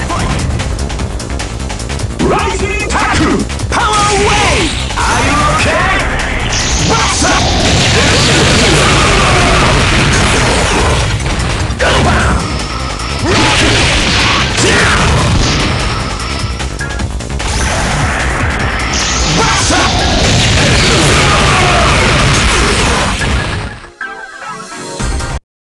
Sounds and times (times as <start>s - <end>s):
Music: 0.0s - 25.4s.